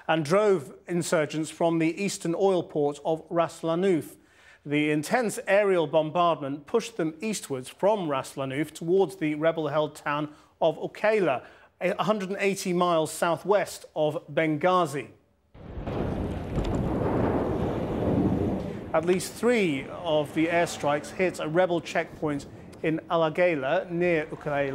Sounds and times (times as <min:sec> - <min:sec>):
Speech: 0:00.0 - 0:15.2, 0:19.0 - 0:24.7
Outside, rural or natural: 0:15.5 - 0:24.7.